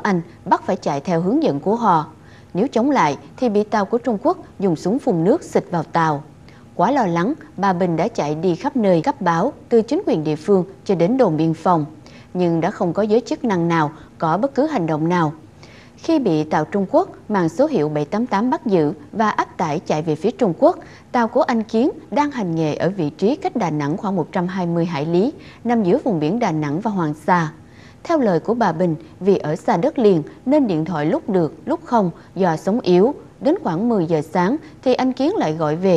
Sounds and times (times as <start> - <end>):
Speech: 0.0 - 15.4, 16.0 - 35.9.